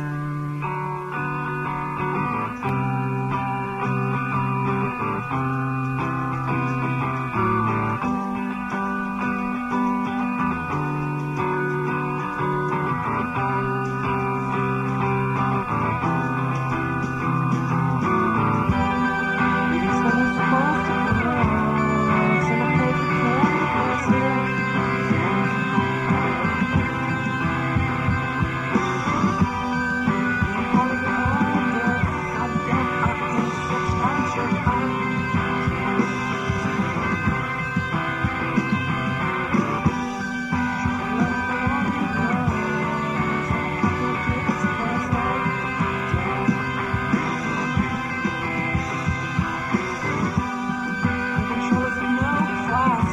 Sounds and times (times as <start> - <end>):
Music: 0.0 - 53.1.